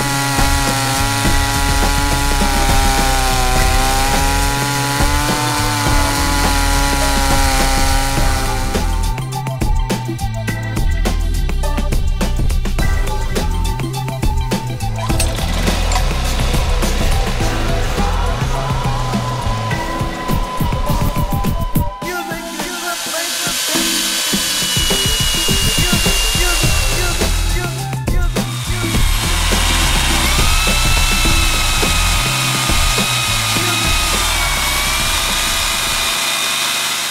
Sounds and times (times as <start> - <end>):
Chainsaw: 0.0 - 21.0, 22.1 - 37.1
Music: 0.0 - 36.1.